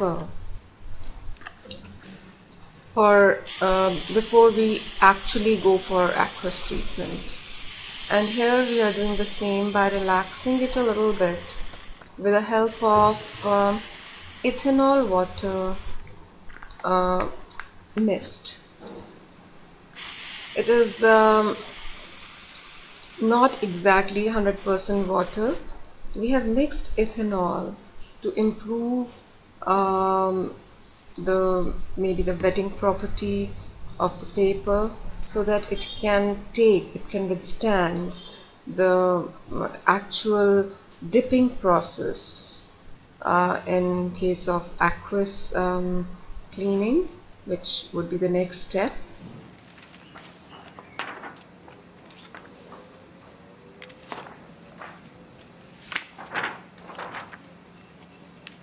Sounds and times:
Speech: 0.0 - 0.4, 3.0 - 7.3, 8.1 - 11.5, 12.2 - 13.8, 14.5 - 15.8, 16.8 - 17.4, 18.0 - 18.7, 20.6 - 21.6, 23.2 - 30.6, 31.2 - 49.1.

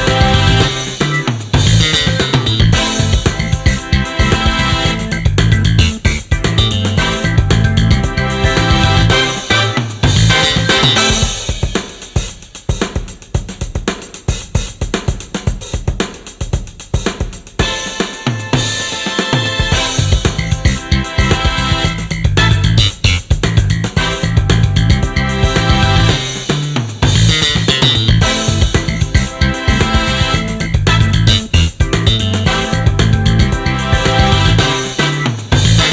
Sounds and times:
Funk: 0.0 - 35.9.

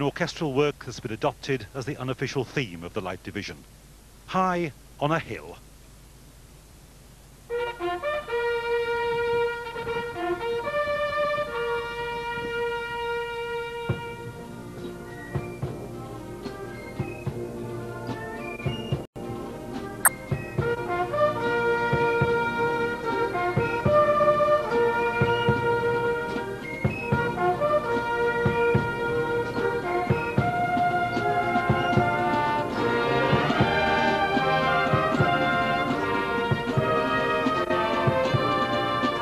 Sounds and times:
Music: 7.5 - 39.2.

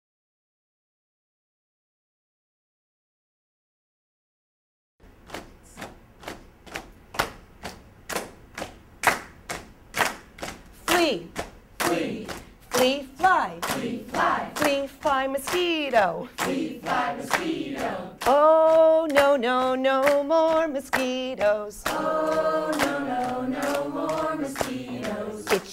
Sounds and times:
Speech: 10.9 - 13.6, 14.6 - 16.3.

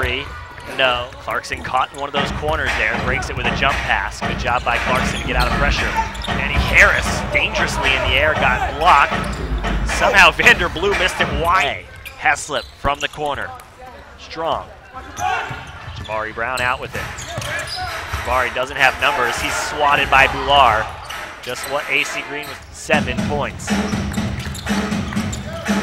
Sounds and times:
Speech: 0.0 - 9.3, 9.9 - 23.8.

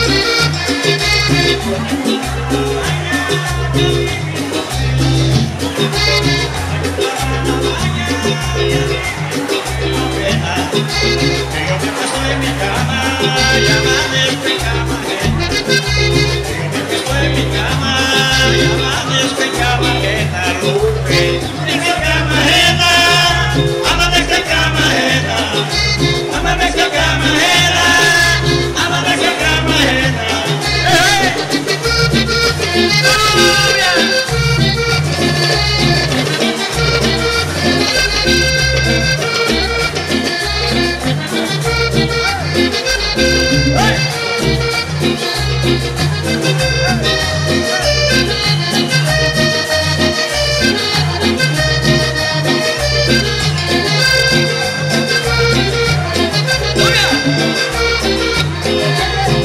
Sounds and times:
Music: 0.0 - 59.4.

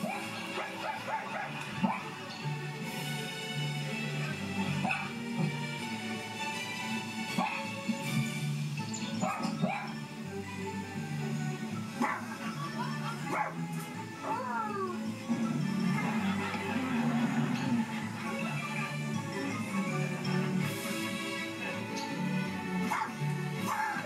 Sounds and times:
Music: 0.0 - 24.0
Bow-wow: 4.8 - 5.5, 7.4 - 7.7, 9.2 - 10.0, 12.0 - 12.3, 13.3 - 13.6, 22.9 - 24.0.

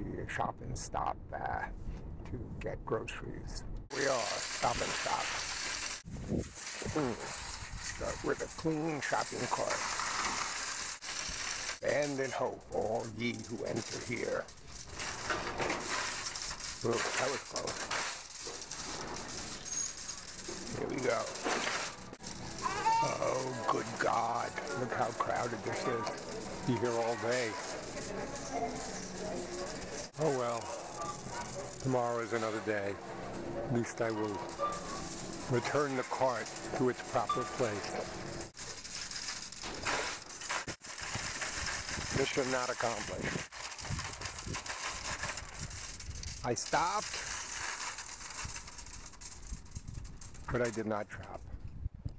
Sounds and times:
Speech: 0.0 - 5.3, 6.8 - 7.3, 7.9 - 9.8, 11.8 - 14.5, 16.8 - 17.8, 20.7 - 21.4, 22.6 - 27.8, 30.2 - 30.8, 31.8 - 33.0, 33.7 - 34.5, 35.5 - 38.1, 42.1 - 43.4, 46.4 - 47.2, 50.5 - 51.4.

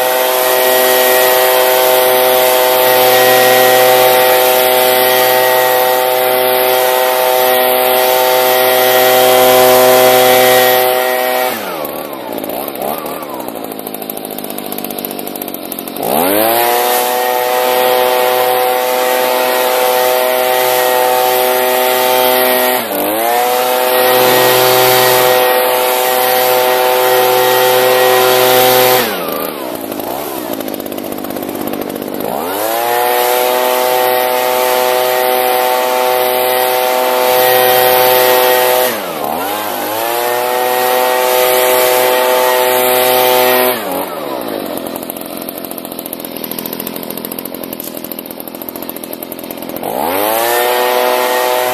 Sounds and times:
Power tool: 0.0 - 51.7.

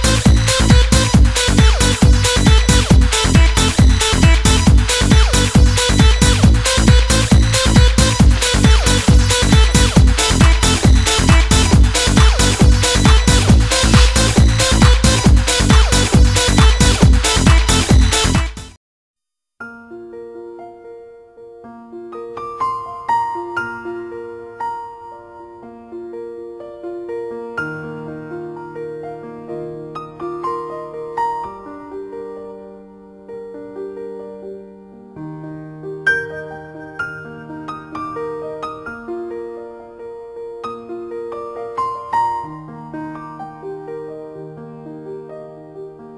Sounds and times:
Music: 0.0 - 18.8, 19.6 - 46.1.

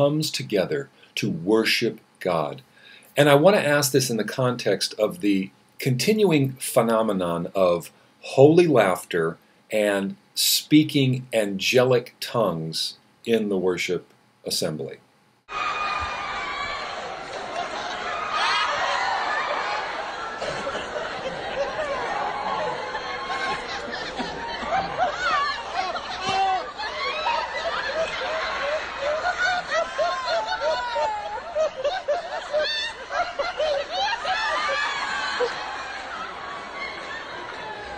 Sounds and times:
Speech: 0.0 - 2.6, 3.2 - 15.0
Snicker: 17.0 - 37.9.

